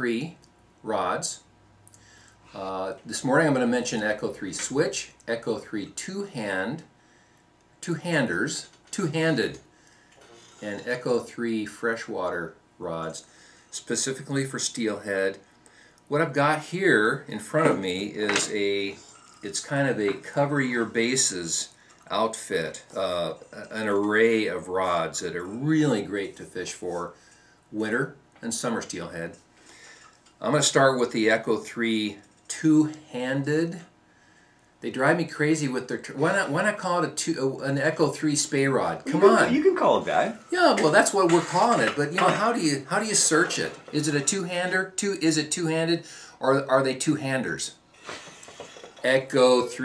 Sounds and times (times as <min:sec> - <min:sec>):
Speech: 0:00.0 - 0:01.5, 0:02.5 - 0:06.9, 0:07.8 - 0:09.7, 0:10.6 - 0:15.4, 0:16.1 - 0:29.4, 0:30.4 - 0:33.9, 0:34.8 - 0:47.8, 0:49.0 - 0:49.8.